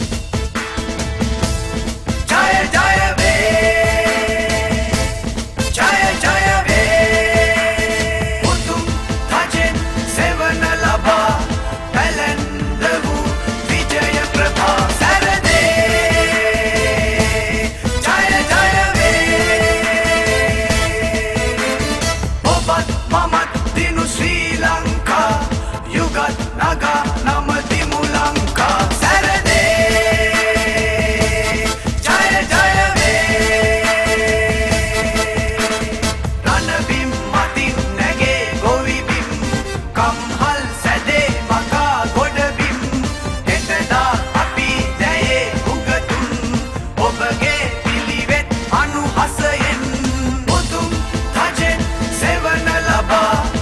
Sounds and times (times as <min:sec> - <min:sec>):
Theme music: 0:00.0 - 0:53.6.